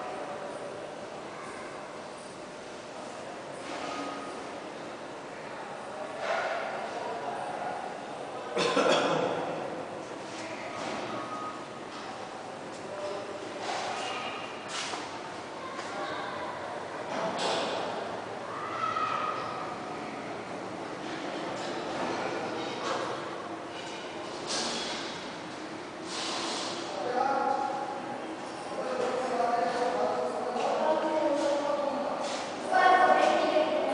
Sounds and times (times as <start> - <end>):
Speech: 15.6 - 17.8, 26.9 - 33.9.